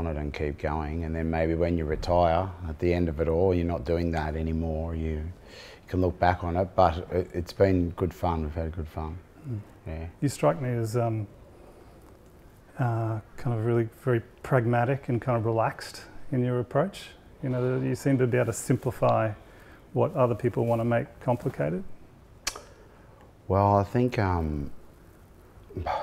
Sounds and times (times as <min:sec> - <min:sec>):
Speech: 0:00.0 - 0:11.3, 0:12.8 - 0:19.4, 0:20.0 - 0:21.9, 0:23.5 - 0:24.8.